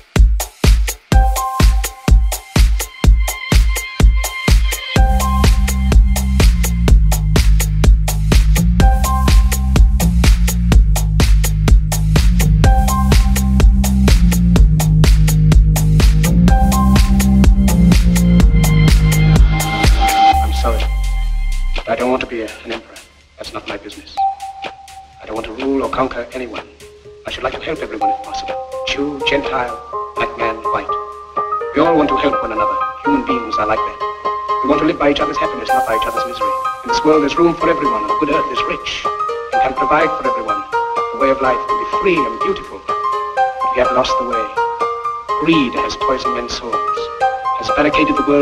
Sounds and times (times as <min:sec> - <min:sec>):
Music: 0:00.0 - 0:48.4.